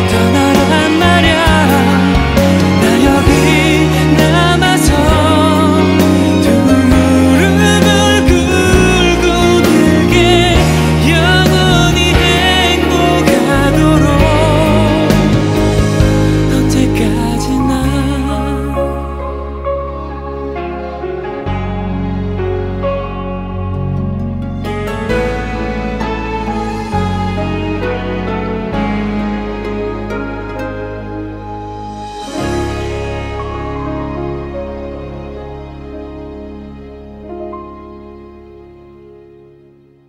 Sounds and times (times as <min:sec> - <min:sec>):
Tender music: 0:00.0 - 0:40.0.